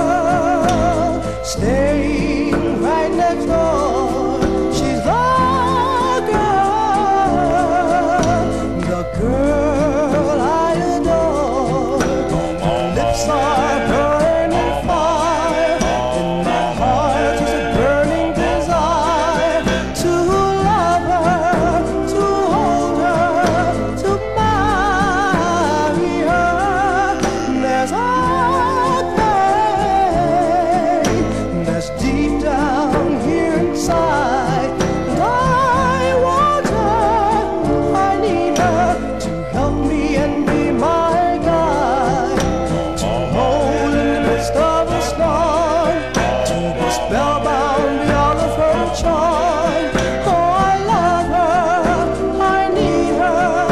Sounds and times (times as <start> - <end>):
Music: 0.0 - 53.7.